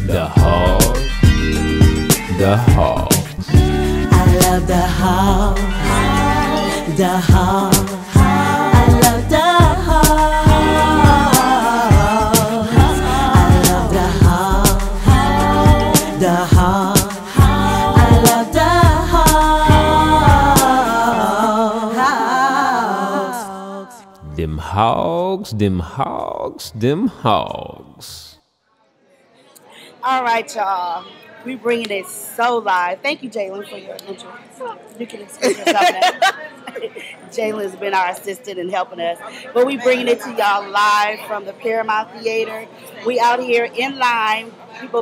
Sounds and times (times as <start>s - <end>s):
Singing: 0.0s - 1.2s, 2.4s - 24.9s
Music: 0.0s - 21.9s.